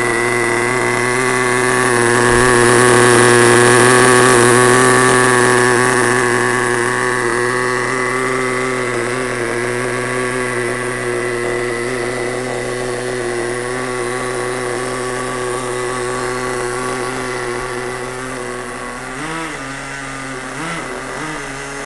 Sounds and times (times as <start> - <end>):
Accelerating, revving, vroom: 0.0 - 21.8
Vehicle: 0.0 - 21.8.